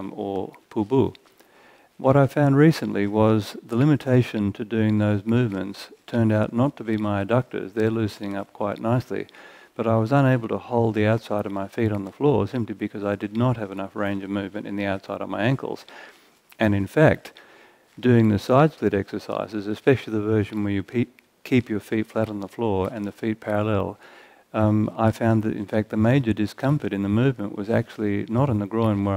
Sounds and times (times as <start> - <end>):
Speech: 0.0 - 1.2, 2.0 - 15.9, 16.6 - 17.4, 18.0 - 29.1.